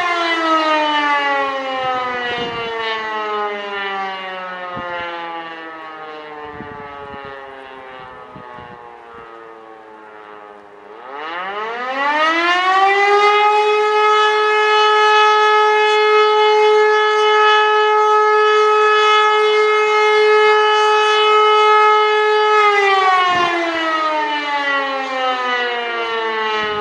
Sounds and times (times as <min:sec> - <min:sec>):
Siren: 0:00.0 - 0:26.8.